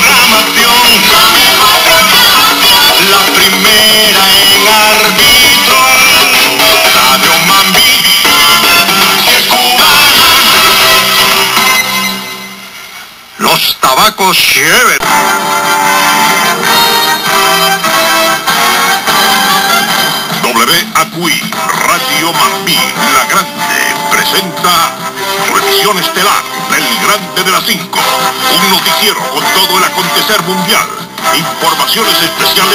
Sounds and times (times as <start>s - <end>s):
Radio: 0.0s - 11.0s, 13.0s - 15.2s, 20.4s - 32.7s
Music: 0.0s - 13.3s, 14.6s - 32.7s
Speech: 13.4s - 15.0s, 20.4s - 32.7s.